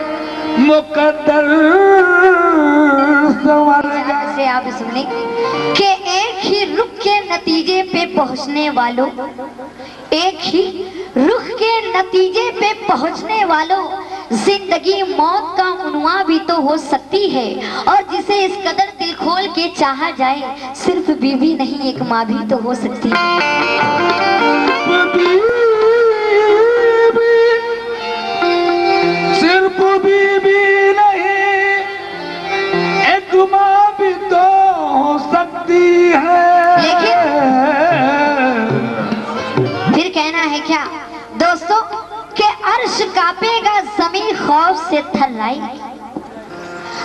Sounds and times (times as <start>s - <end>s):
Carnatic music: 0.0s - 47.0s
Singing: 33.0s - 39.4s.